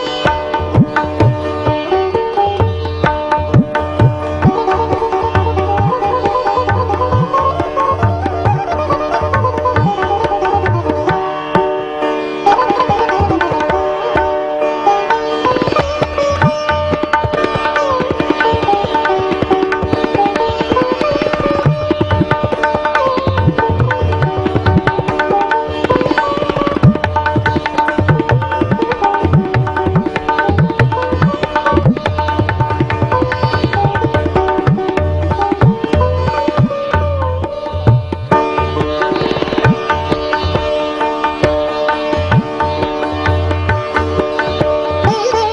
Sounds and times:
Sitar: 0.0 - 45.5.

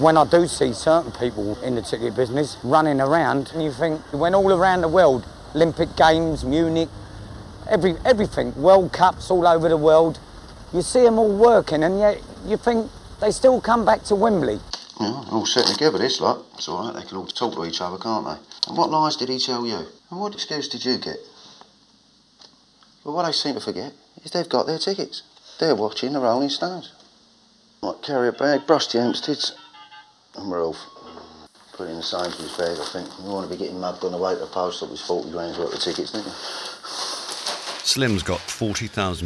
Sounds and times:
Speech: 0.0 - 6.9, 7.7 - 10.2, 10.8 - 21.3, 23.0 - 27.0, 31.8 - 36.4, 37.8 - 39.2.

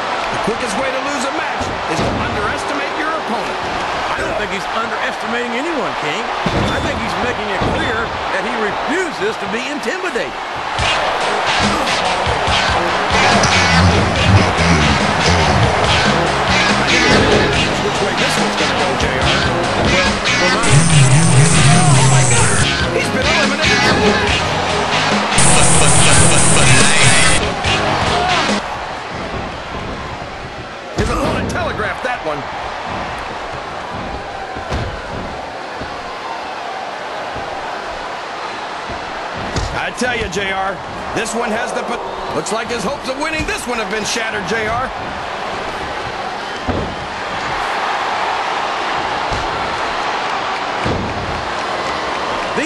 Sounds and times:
Speech: 0.5 - 10.3, 16.9 - 24.3, 31.0 - 32.4, 39.8 - 44.9
Music: 10.8 - 29.2.

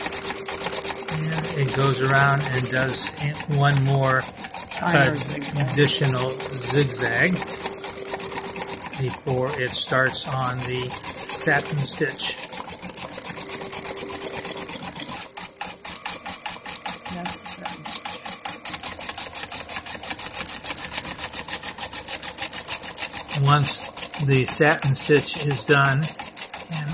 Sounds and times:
Inside, small room: 0.0 - 16.4
Sewing machine: 0.0 - 26.9
Speech: 1.1 - 7.4, 9.0 - 12.4, 17.1 - 17.9, 23.3 - 26.1, 26.7 - 26.9.

